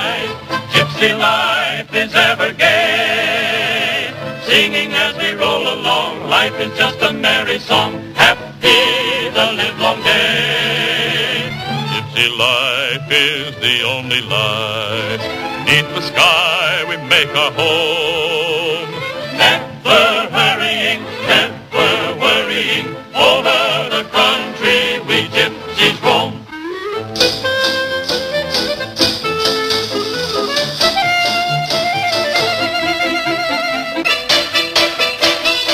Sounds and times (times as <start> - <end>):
Music: 0.0 - 35.7.